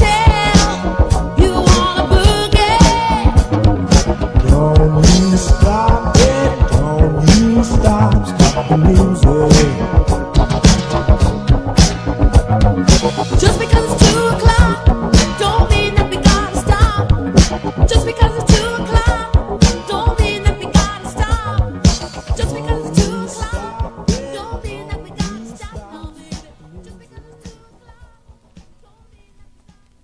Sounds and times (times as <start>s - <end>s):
Funk: 0.0s - 29.9s.